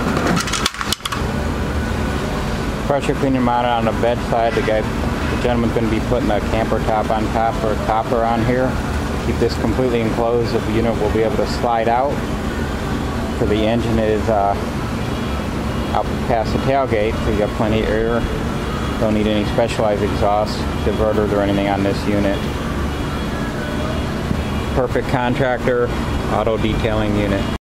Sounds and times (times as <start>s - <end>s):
Speech: 2.9s - 12.2s, 13.4s - 14.7s, 15.9s - 18.3s, 19.0s - 22.5s, 24.7s - 27.6s.